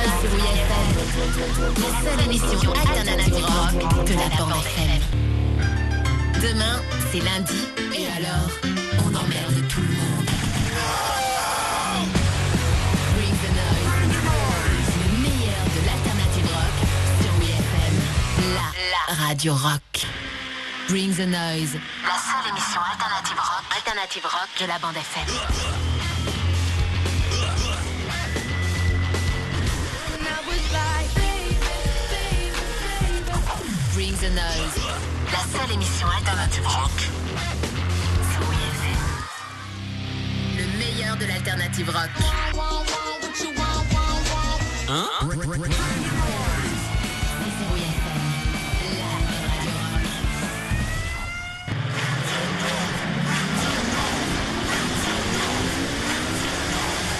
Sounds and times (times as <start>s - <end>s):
Speech: 0.0s - 5.2s, 6.4s - 10.3s, 13.1s - 20.1s, 20.9s - 25.8s, 33.8s - 37.1s, 38.2s - 39.2s, 40.6s - 42.4s, 44.9s - 50.2s
Music: 0.0s - 57.1s.